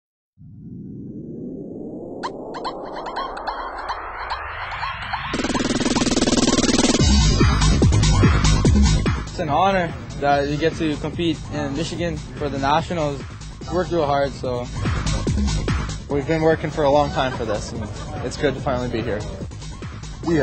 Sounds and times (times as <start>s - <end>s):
Outside, urban or manmade: 0.4s - 20.4s
Music: 5.3s - 20.4s.